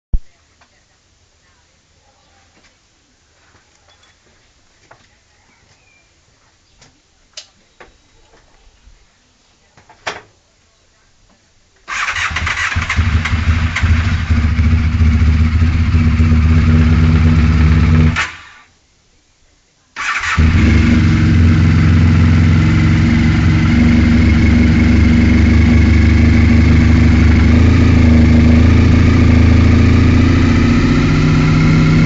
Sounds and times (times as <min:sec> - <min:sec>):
Speech: 0:00.2 - 0:11.9, 0:19.1 - 0:20.0.